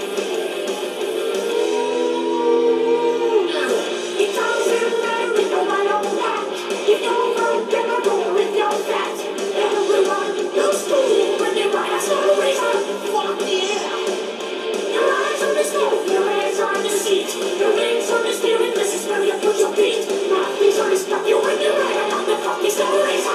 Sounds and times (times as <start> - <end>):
Pop music: 0.0 - 23.3.